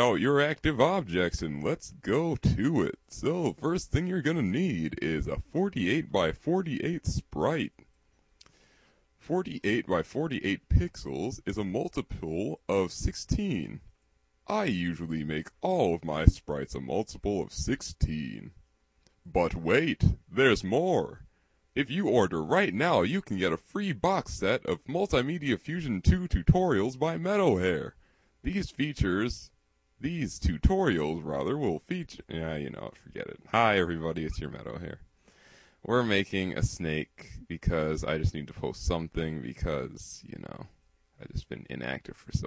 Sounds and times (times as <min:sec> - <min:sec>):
Speech: 0:00.0 - 0:07.8, 0:09.2 - 0:13.9, 0:14.5 - 0:18.6, 0:19.3 - 0:35.1, 0:35.8 - 0:42.4.